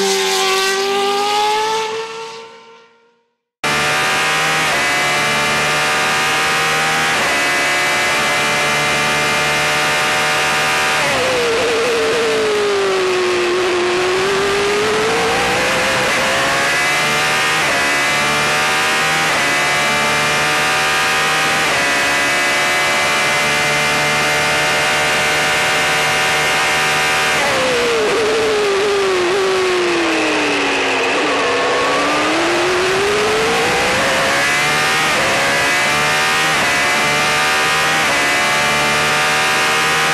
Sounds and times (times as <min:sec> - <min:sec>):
Car: 0:00.0 - 0:40.1.